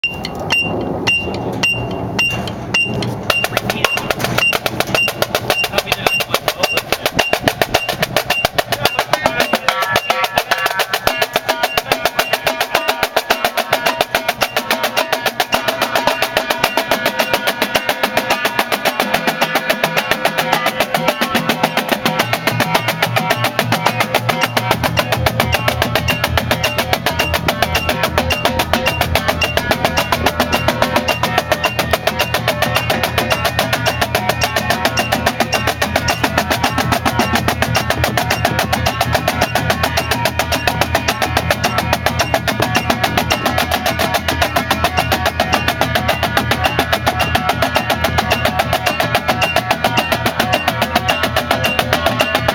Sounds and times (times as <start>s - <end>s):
Drum: 0.0s - 52.5s
Speech: 3.3s - 4.2s, 5.6s - 7.3s, 8.6s - 10.1s.